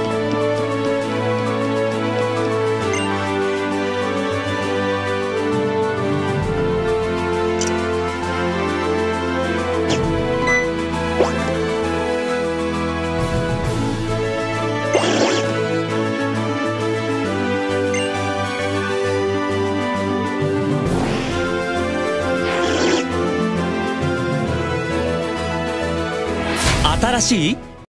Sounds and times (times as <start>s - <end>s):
Music: 0.0s - 27.8s
Speech: 26.8s - 27.6s.